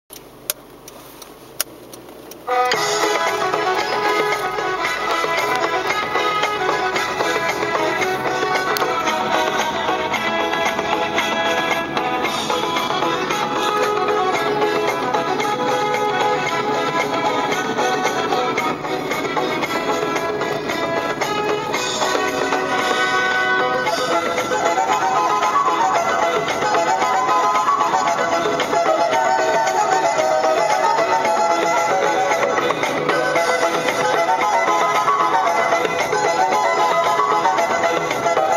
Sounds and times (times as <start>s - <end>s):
Vehicle: 0.1s - 38.5s.